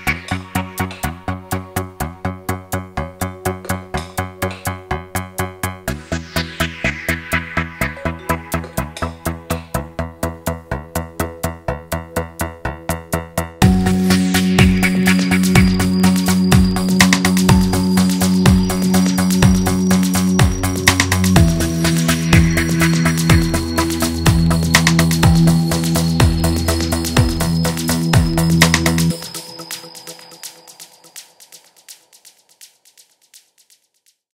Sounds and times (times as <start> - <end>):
Music: 0.0 - 34.3.